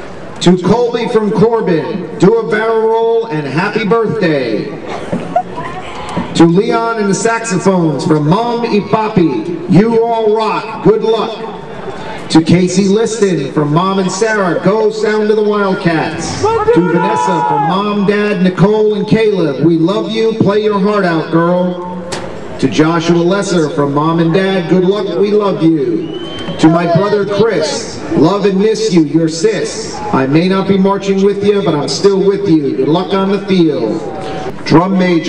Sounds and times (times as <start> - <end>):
Speech: 0.4 - 4.8, 5.6 - 11.5, 12.3 - 21.9, 22.6 - 26.0, 26.6 - 34.0, 34.7 - 35.2.